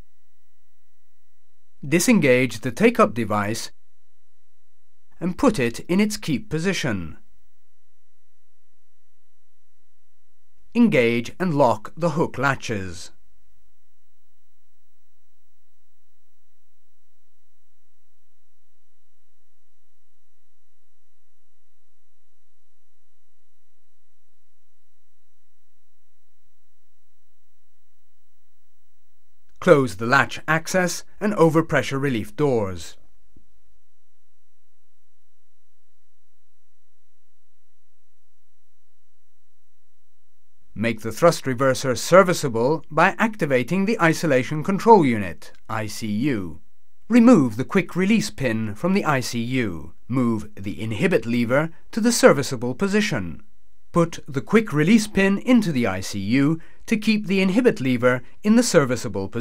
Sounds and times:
Speech: 0:01.8 - 0:03.8, 0:05.2 - 0:07.2, 0:10.7 - 0:13.2, 0:29.6 - 0:33.0, 0:40.8 - 0:59.4.

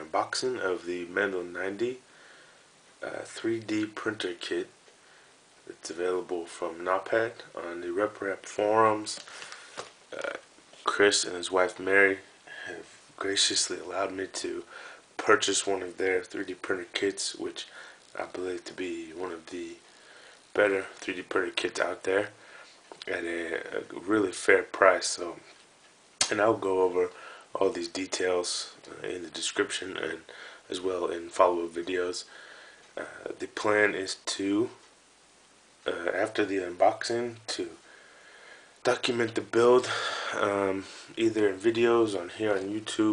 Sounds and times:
Speech: 0:00.0 - 0:02.1, 0:03.0 - 0:04.8, 0:05.6 - 0:09.3, 0:10.1 - 0:19.9, 0:20.6 - 0:22.4, 0:23.0 - 0:25.6, 0:26.2 - 0:32.3, 0:33.0 - 0:34.9, 0:35.8 - 0:37.8, 0:38.8 - 0:43.1.

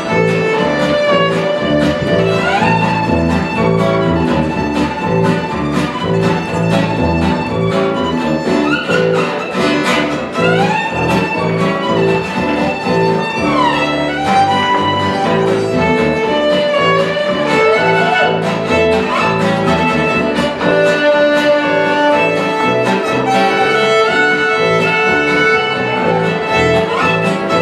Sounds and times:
Violin, fiddle: 0:00.0 - 0:27.6.

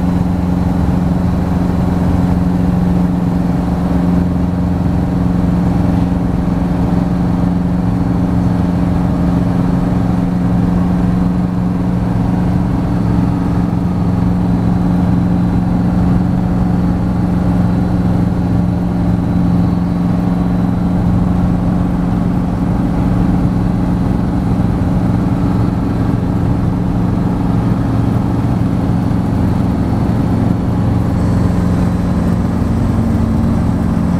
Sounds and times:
Aircraft: 0:00.0 - 0:34.1.

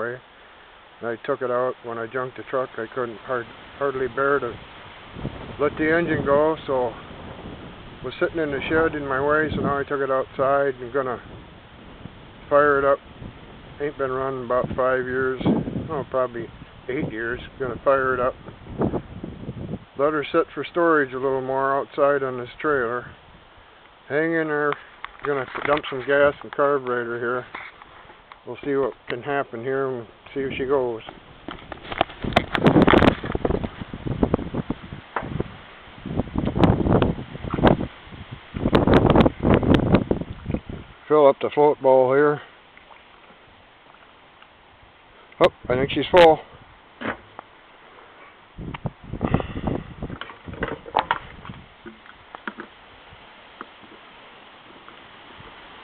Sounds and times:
Speech: 0:00.0 - 0:00.2, 0:01.0 - 0:04.6, 0:05.6 - 0:07.0, 0:08.0 - 0:11.3, 0:12.5 - 0:13.0, 0:13.8 - 0:18.4, 0:20.0 - 0:23.2, 0:24.1 - 0:27.5, 0:28.5 - 0:31.2, 0:41.1 - 0:42.5, 0:45.4 - 0:46.5.

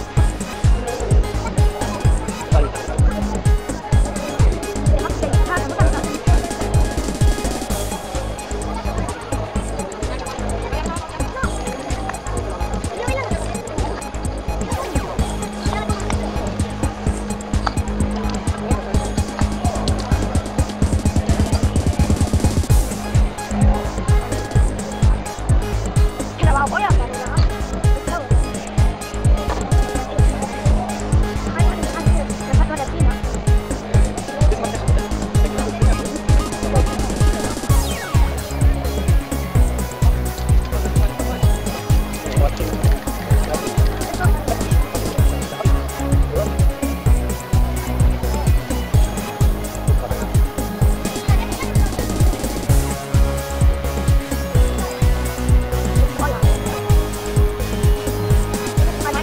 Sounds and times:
Speech: 0:00.0 - 0:22.4, 0:23.0 - 0:53.0, 0:55.9 - 0:57.4, 0:58.4 - 0:59.2
Music: 0:00.0 - 0:59.2.

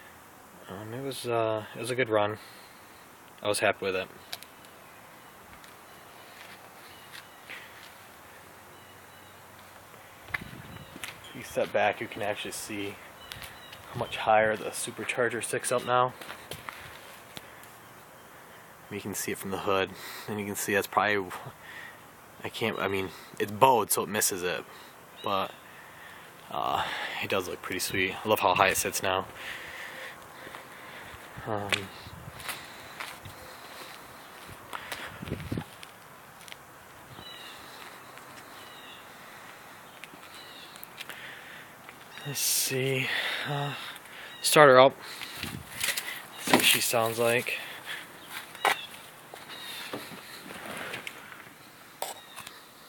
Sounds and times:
Outside, rural or natural: 0:00.0 - 0:52.8
Speech: 0:00.6 - 0:02.4, 0:03.4 - 0:04.1, 0:11.4 - 0:13.0, 0:13.9 - 0:16.2, 0:18.9 - 0:21.6, 0:22.4 - 0:25.5, 0:26.5 - 0:29.3, 0:31.4 - 0:32.0, 0:42.2 - 0:43.8, 0:44.4 - 0:45.0, 0:46.5 - 0:47.7
Walk, footsteps: 0:06.4 - 0:08.0, 0:16.2 - 0:17.5, 0:31.7 - 0:36.6.

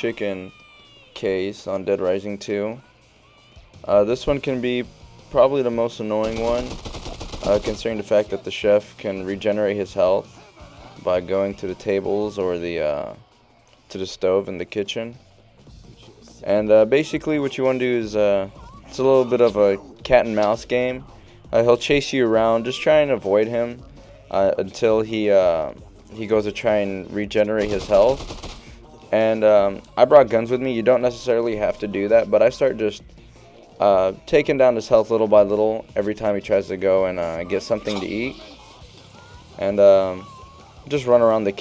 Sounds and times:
Speech: 0:00.0 - 0:00.6, 0:01.2 - 0:02.8, 0:03.8 - 0:06.8, 0:07.4 - 0:13.2, 0:13.9 - 0:15.2, 0:16.0 - 0:28.2, 0:29.1 - 0:33.0, 0:33.8 - 0:38.8, 0:39.6 - 0:41.6
Music: 0:00.0 - 0:41.6.

